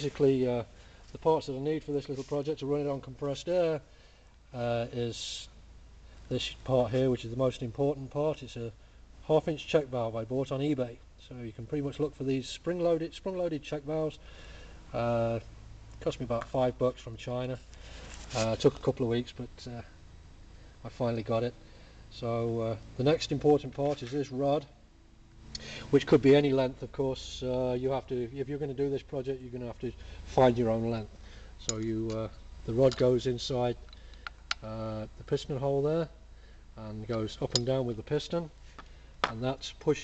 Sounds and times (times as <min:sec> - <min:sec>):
Speech: 0:00.0 - 0:03.9, 0:04.5 - 0:05.6, 0:06.3 - 0:14.2, 0:14.9 - 0:17.6, 0:18.3 - 0:20.0, 0:20.8 - 0:24.8, 0:25.9 - 0:33.9, 0:34.6 - 0:36.2, 0:36.8 - 0:38.6, 0:39.3 - 0:40.0.